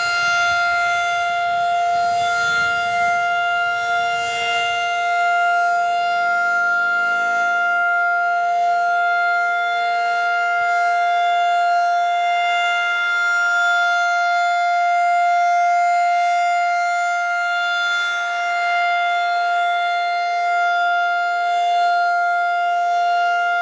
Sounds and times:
Civil defense siren: 0:00.0 - 0:23.6.

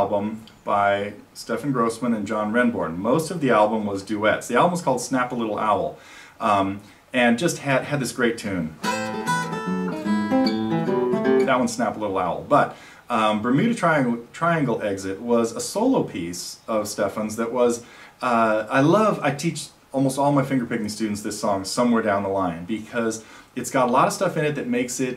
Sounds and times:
Acoustic guitar: 0:07.6 - 0:13.8
Strum: 0:08.8 - 0:11.8.

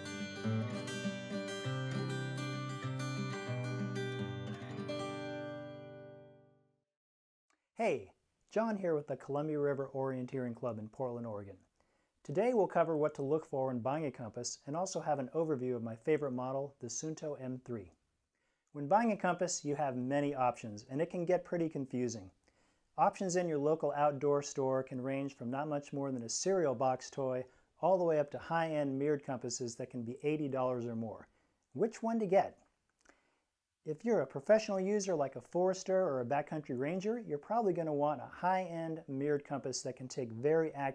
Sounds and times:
Speech: 0:07.8 - 0:11.6, 0:12.3 - 0:18.0, 0:18.8 - 0:22.4, 0:23.0 - 0:32.6, 0:33.9 - 0:40.9.

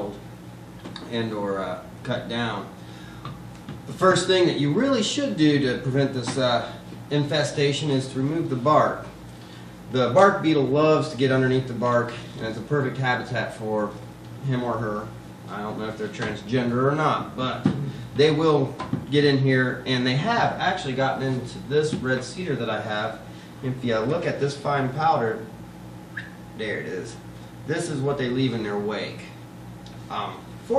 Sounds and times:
Speech: 0:00.0 - 0:00.2, 0:01.0 - 0:02.8, 0:03.9 - 0:09.2, 0:09.9 - 0:25.5, 0:26.6 - 0:29.4, 0:30.1 - 0:30.7.

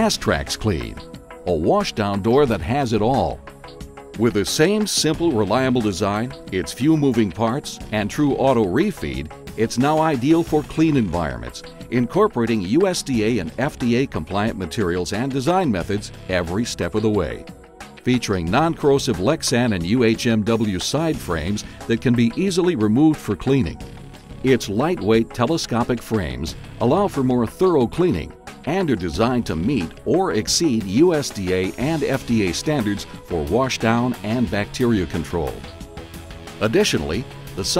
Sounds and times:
Speech: 0:00.0 - 0:03.4, 0:04.2 - 0:17.4, 0:18.1 - 0:23.8, 0:24.5 - 0:35.6, 0:36.6 - 0:37.7
Music: 0:00.0 - 0:37.7.

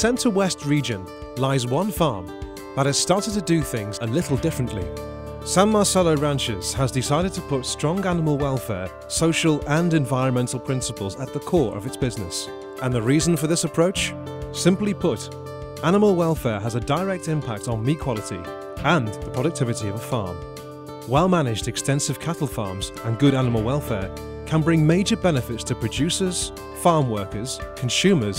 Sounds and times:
Speech: 0:00.0 - 0:04.9, 0:05.5 - 0:20.4, 0:21.1 - 0:28.3
Music: 0:00.0 - 0:28.3.

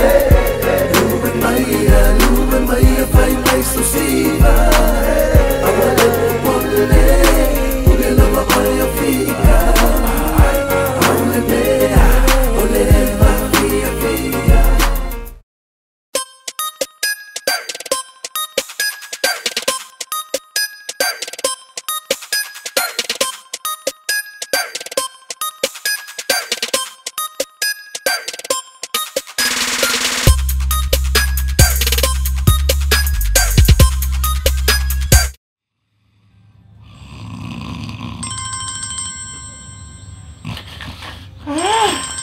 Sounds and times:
Hip hop music: 0:00.0 - 0:15.4, 0:17.4 - 0:20.1, 0:20.9 - 0:27.0, 0:27.9 - 0:35.4.

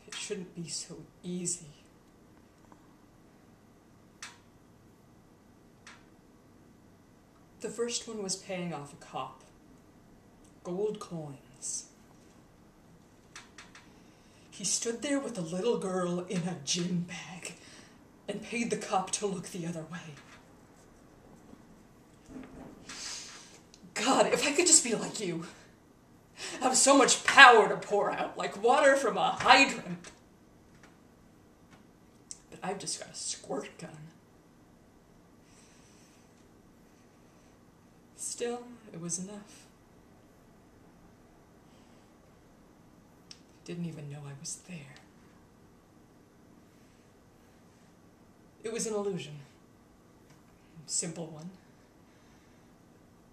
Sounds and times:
Narration, monologue: 0:00.0 - 0:53.3.

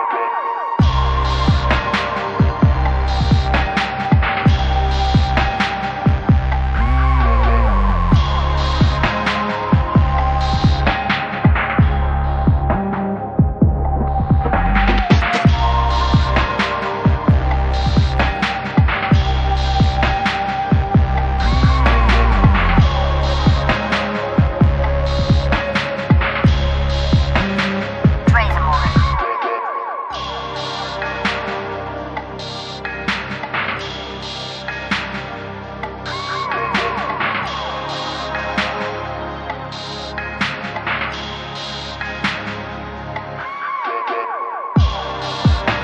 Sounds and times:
Throbbing: 0:00.8 - 0:29.2.

